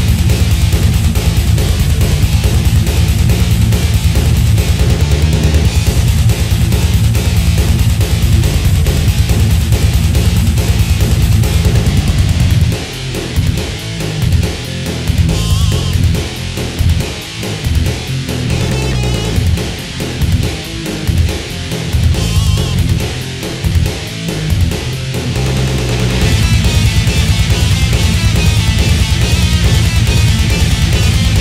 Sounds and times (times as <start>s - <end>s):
Soundtrack music: 17.8s - 23.9s.